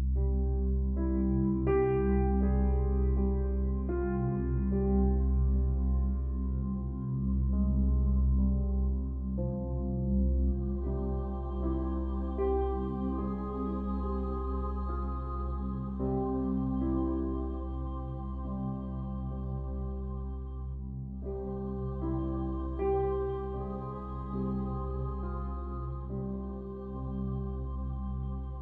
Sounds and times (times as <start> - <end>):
Music: 0.0 - 28.6.